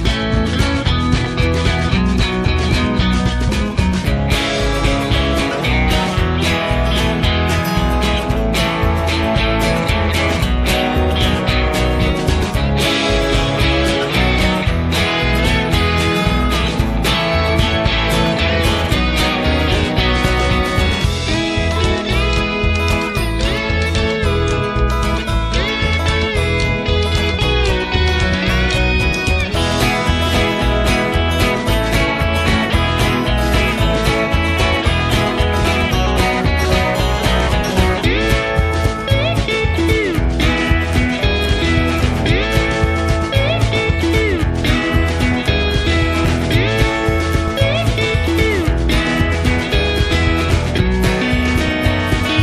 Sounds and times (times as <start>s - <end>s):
Music: 0.0s - 52.4s.